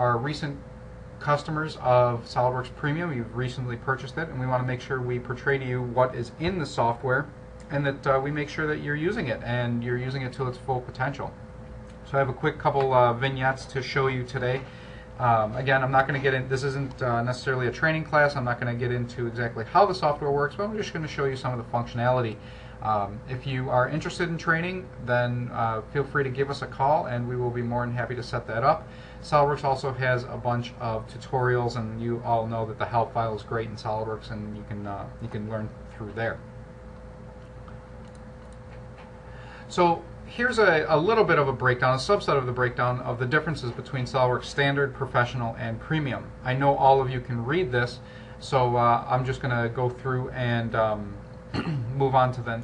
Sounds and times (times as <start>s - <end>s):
Speech: 0.0s - 11.4s, 12.0s - 36.5s, 39.7s - 52.6s.